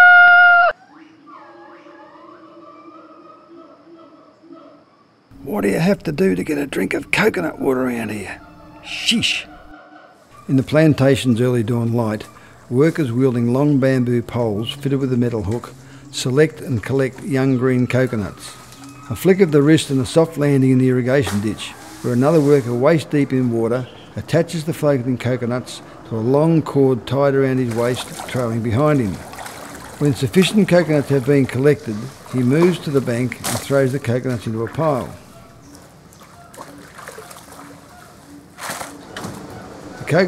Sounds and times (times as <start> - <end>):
Speech: 5.4 - 9.6, 10.5 - 29.2, 30.0 - 35.2, 40.0 - 40.2.